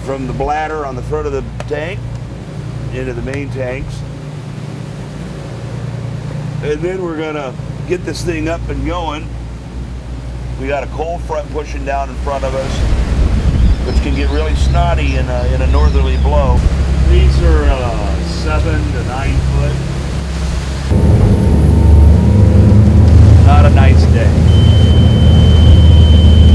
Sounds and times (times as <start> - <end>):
Speech: 0.0 - 2.0, 2.9 - 4.1, 6.6 - 9.3, 10.6 - 12.9, 13.8 - 19.8, 23.4 - 24.4
Boat, Water vehicle: 0.0 - 26.5
Ocean: 0.0 - 26.5.